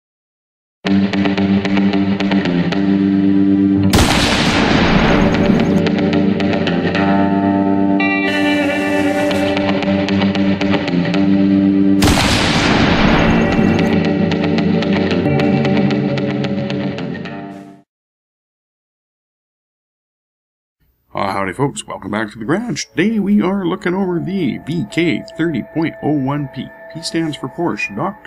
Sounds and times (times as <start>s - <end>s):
Music: 0.8s - 17.9s, 21.9s - 28.2s.